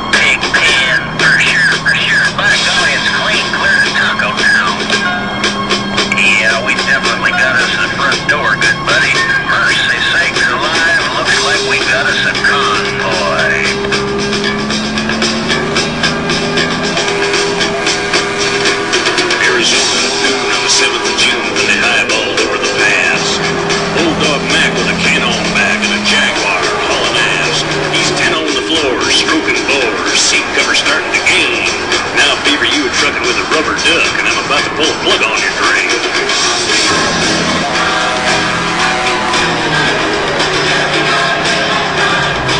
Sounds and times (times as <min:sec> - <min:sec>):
Music: 0:00.0 - 0:42.5
Truck: 0:00.0 - 0:42.5.